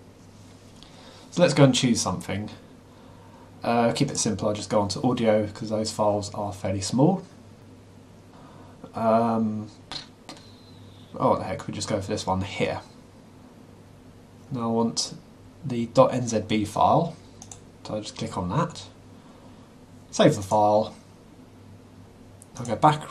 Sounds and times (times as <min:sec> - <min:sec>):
Speech: 0:01.3 - 0:02.6, 0:03.6 - 0:07.3, 0:08.9 - 0:10.1, 0:11.2 - 0:13.0, 0:14.5 - 0:17.2, 0:17.8 - 0:19.0, 0:20.1 - 0:21.0, 0:22.6 - 0:23.1.